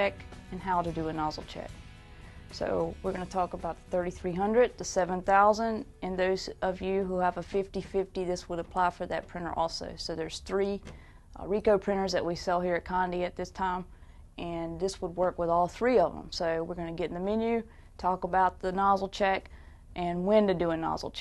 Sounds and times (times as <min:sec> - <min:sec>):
Speech: 0:00.0 - 0:01.7, 0:02.6 - 0:21.2.